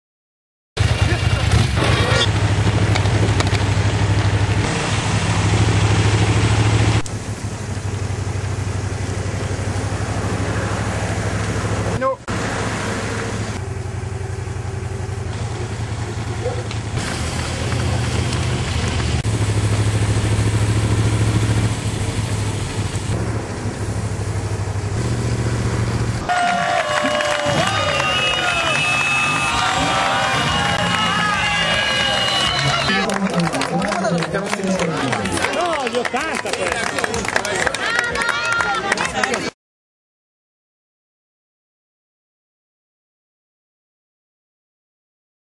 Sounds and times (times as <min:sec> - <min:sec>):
Outside, urban or manmade: 0:00.8 - 0:39.6
Speech: 0:32.9 - 0:39.5.